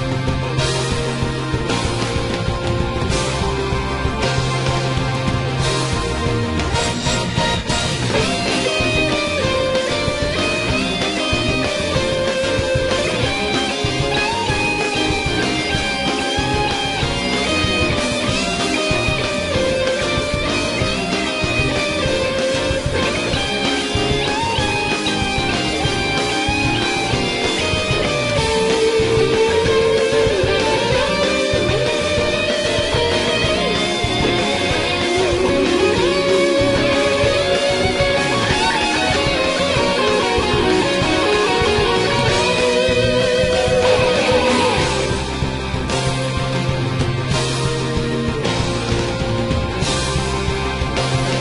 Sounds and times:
Music: 0.0 - 51.4.

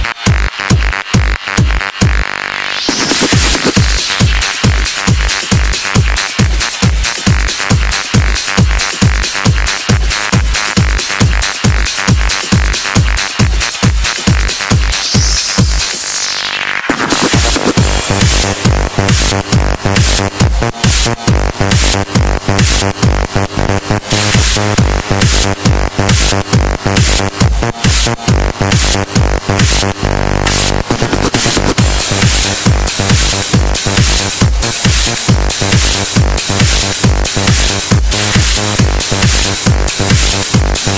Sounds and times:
Techno: 0.0 - 40.9
Trance music: 0.0 - 40.9.

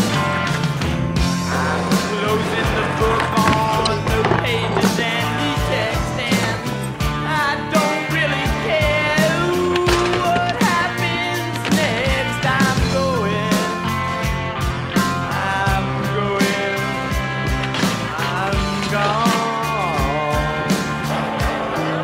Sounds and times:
Music: 0.0 - 22.0
Skateboard: 1.2 - 6.9, 8.6 - 13.7, 16.4 - 22.0.

